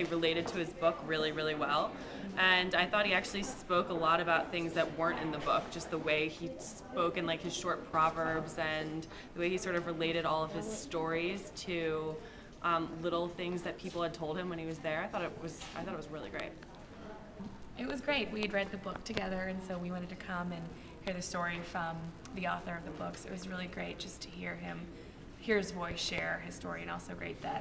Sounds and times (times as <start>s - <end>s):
Female speech, woman speaking: 0.0s - 27.6s.